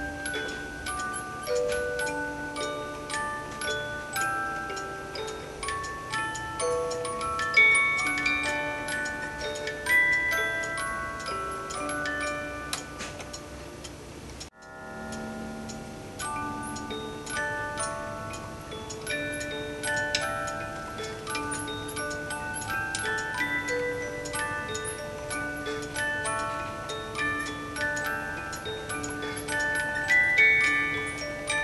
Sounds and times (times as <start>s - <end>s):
Wind chime: 0.0s - 13.6s, 14.5s - 31.6s.